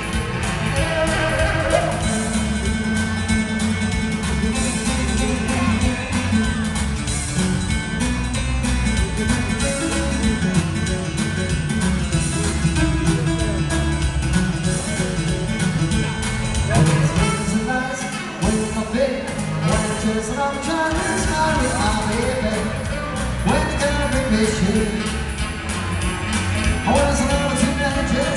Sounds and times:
Rock and roll: 0:00.0 - 0:28.3.

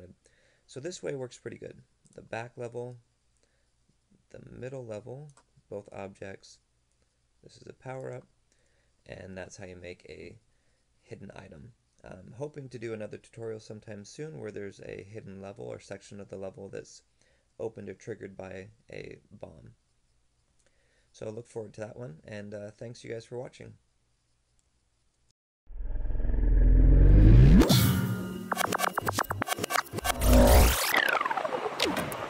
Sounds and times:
Speech: 0:00.0 - 0:03.0, 0:04.3 - 0:06.7, 0:07.4 - 0:08.3, 0:09.0 - 0:10.4, 0:11.0 - 0:19.8, 0:21.2 - 0:23.8.

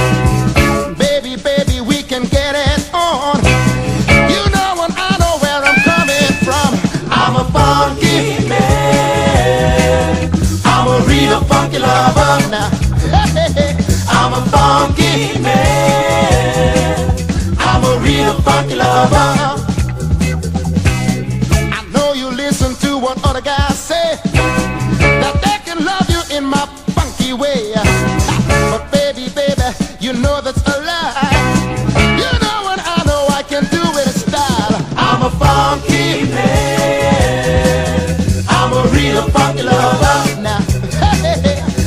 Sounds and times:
Music: 0:00.0 - 0:41.8.

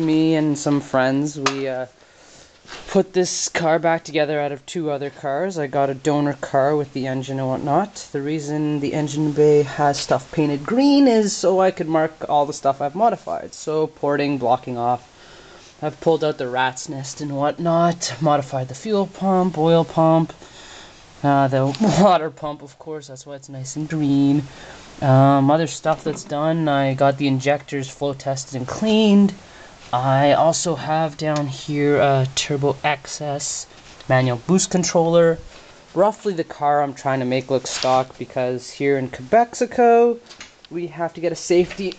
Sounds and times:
Speech: 0:00.0 - 0:02.0, 0:02.7 - 0:15.1, 0:15.8 - 0:20.4, 0:21.2 - 0:41.9.

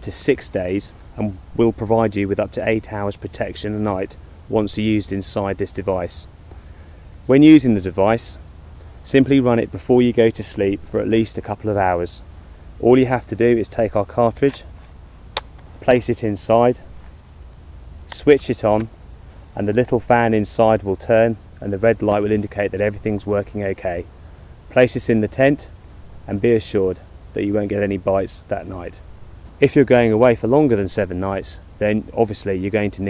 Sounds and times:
Speech: 0:00.0 - 0:06.3, 0:07.3 - 0:08.4, 0:09.0 - 0:12.2, 0:12.8 - 0:14.7, 0:15.8 - 0:16.9, 0:18.1 - 0:18.9, 0:19.6 - 0:24.1, 0:24.7 - 0:29.0, 0:29.6 - 0:33.0.

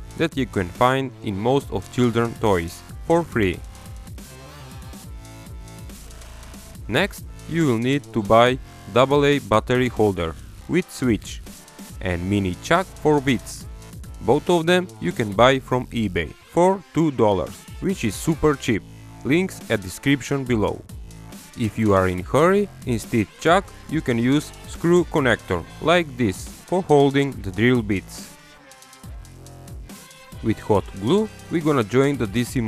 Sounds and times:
Music: 0:00.0 - 0:32.6
Speech: 0:00.2 - 0:03.6, 0:06.9 - 0:11.4, 0:12.0 - 0:20.8, 0:21.6 - 0:28.2, 0:30.4 - 0:32.6.

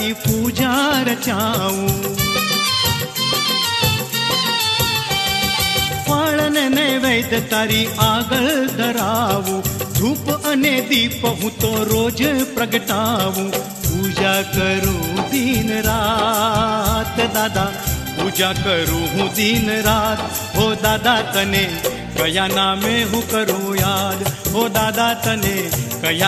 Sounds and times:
Music of Bollywood: 0:00.0 - 0:26.2.

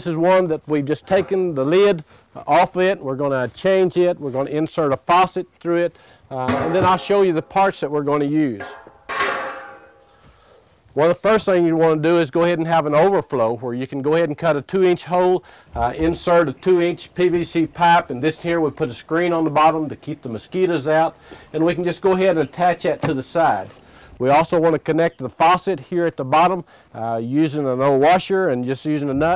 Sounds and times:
Speech: 0:00.0 - 0:08.8, 0:11.0 - 0:29.3.

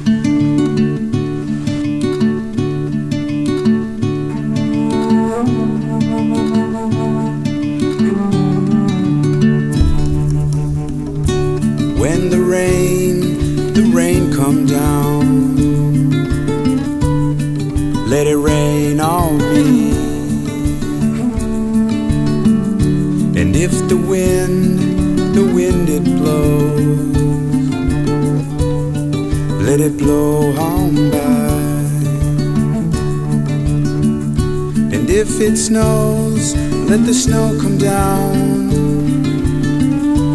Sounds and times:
Music: 0:00.0 - 0:40.3.

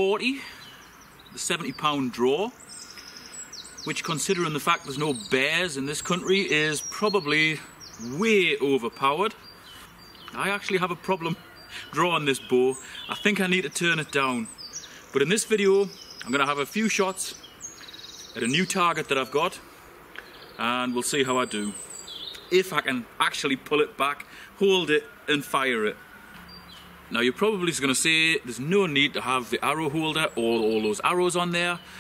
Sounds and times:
Speech: 0:00.0 - 0:00.5, 0:01.4 - 0:02.6, 0:03.9 - 0:09.4, 0:10.3 - 0:14.5, 0:15.2 - 0:17.4, 0:18.4 - 0:19.6, 0:20.6 - 0:21.8, 0:22.5 - 0:26.0, 0:27.1 - 0:31.8
Bird vocalization, bird call, bird song: 0:00.0 - 0:32.0.

